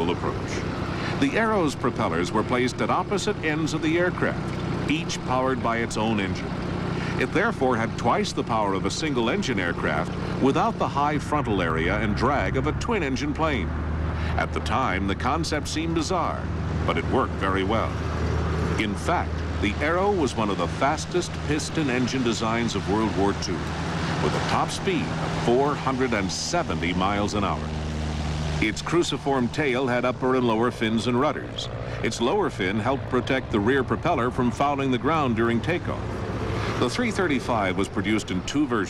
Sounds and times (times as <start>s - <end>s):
Speech: 0.0s - 6.5s, 7.1s - 13.7s, 14.3s - 18.0s, 18.8s - 27.8s, 28.6s - 36.1s, 36.7s - 38.8s.